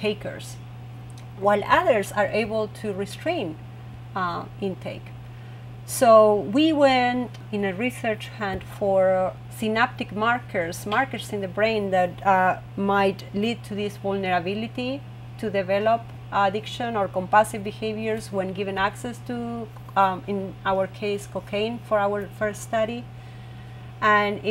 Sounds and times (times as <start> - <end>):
Speech: 0.0 - 0.6, 1.4 - 3.6, 4.2 - 5.2, 5.9 - 23.1, 24.0 - 24.5.